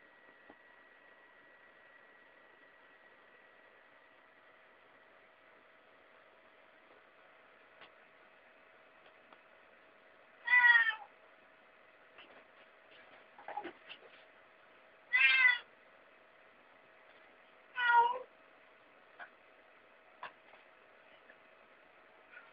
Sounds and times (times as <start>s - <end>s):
Meow: 10.4s - 11.1s, 15.1s - 15.7s, 17.8s - 18.3s.